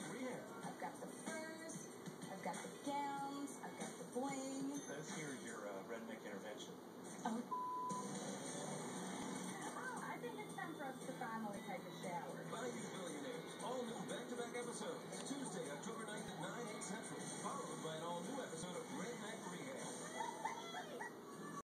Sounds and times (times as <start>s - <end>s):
Music: 0.0s - 6.2s, 7.5s - 21.6s.